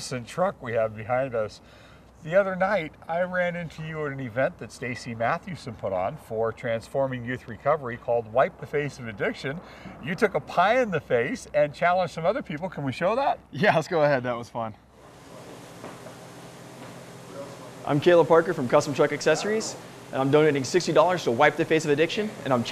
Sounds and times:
Speech: 0.0 - 1.6, 2.2 - 14.8, 17.4 - 22.7.

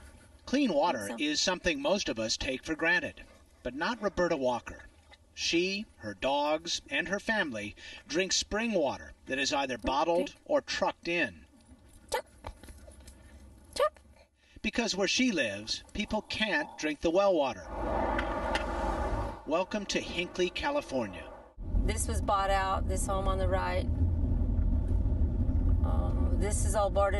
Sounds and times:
Speech: 0.5 - 11.4, 14.6 - 17.6, 19.5 - 21.3, 21.9 - 23.9, 25.8 - 27.1.

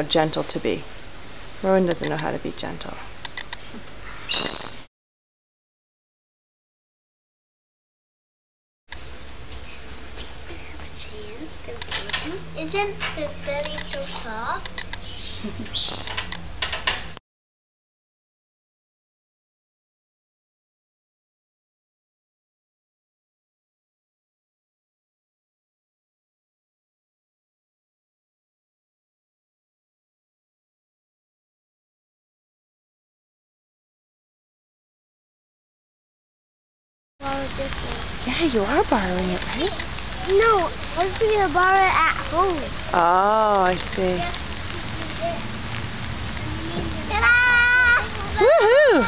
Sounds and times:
Speech: 0.0 - 0.8, 1.6 - 3.0, 10.8 - 14.7, 37.2 - 45.4, 46.4 - 49.0.

